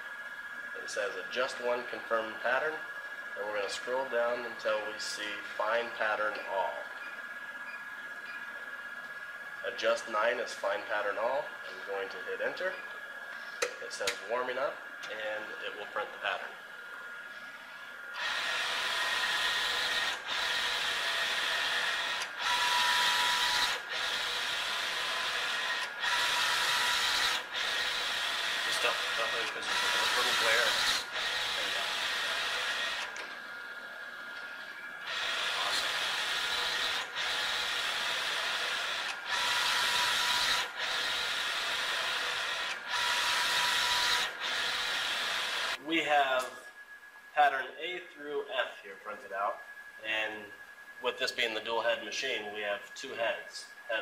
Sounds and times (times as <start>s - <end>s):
Printer: 0.0s - 47.2s, 49.1s - 54.0s
Speech: 0.8s - 2.8s, 3.4s - 6.9s, 9.6s - 12.8s, 13.8s - 16.6s, 28.7s - 30.8s, 45.8s - 46.6s, 47.4s - 54.0s.